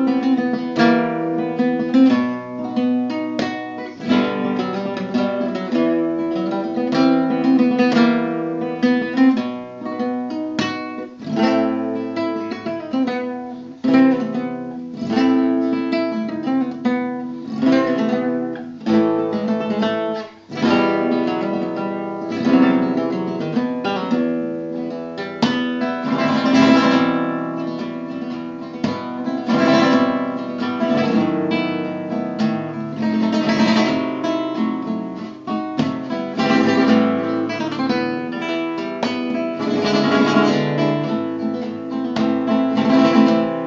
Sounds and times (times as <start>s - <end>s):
Acoustic guitar: 0.0s - 43.6s
Flamenco: 0.0s - 43.6s
Strum: 0.0s - 43.6s.